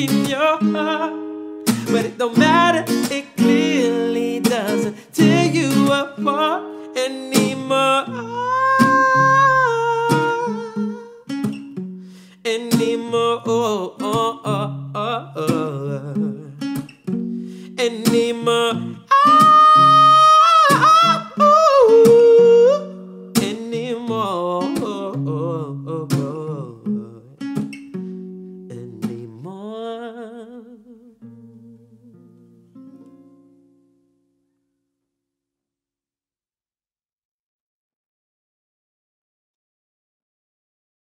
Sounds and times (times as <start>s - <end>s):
Guitar: 0.0s - 35.0s.